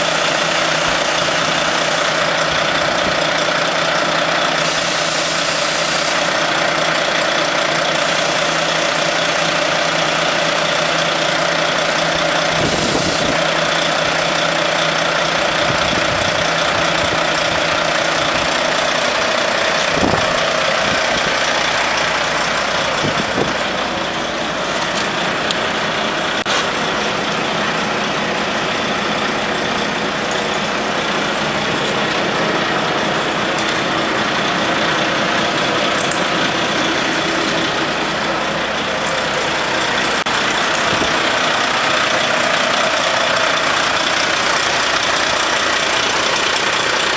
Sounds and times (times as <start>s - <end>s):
Truck: 0.0s - 47.1s.